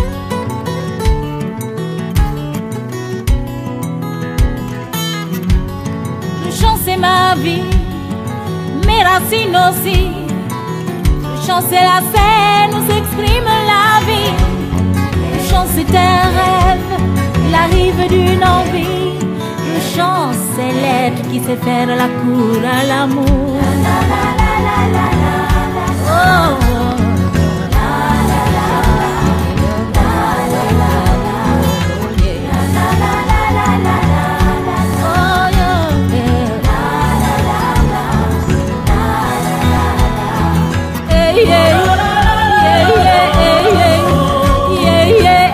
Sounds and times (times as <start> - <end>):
Music: 0.0 - 45.5.